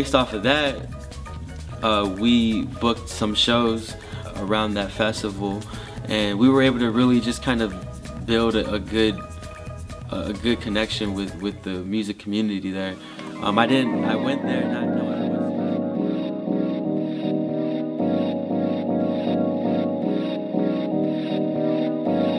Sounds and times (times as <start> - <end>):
Speech: 0.0 - 0.9, 1.8 - 9.2, 10.1 - 15.2
Music: 0.0 - 22.3.